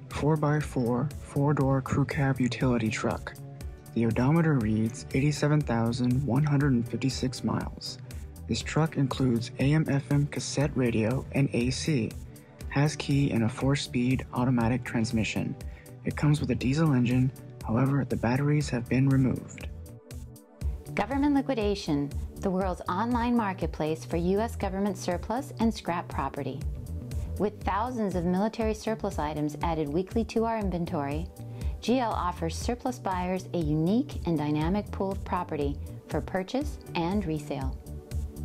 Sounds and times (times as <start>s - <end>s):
Music: 0.0s - 38.4s
Speech: 0.1s - 3.4s, 4.0s - 19.7s, 21.0s - 26.6s, 27.4s - 37.8s.